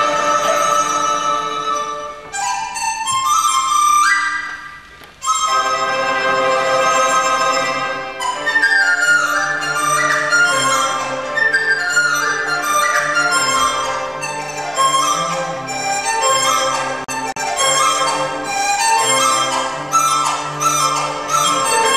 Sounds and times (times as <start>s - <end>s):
Flute: 0.0s - 21.9s.